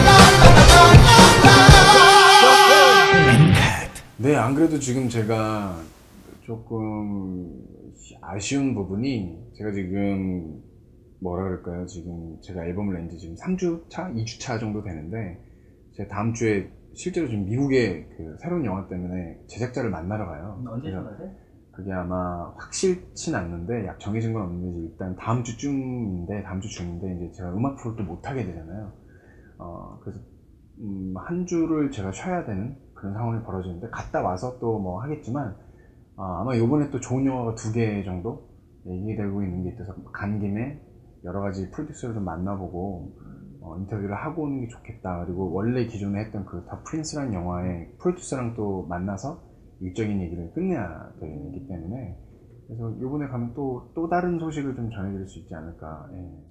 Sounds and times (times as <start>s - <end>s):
Speech: 3.6s - 10.6s, 11.2s - 15.4s, 16.0s - 29.0s, 29.6s - 35.6s, 36.2s - 56.5s.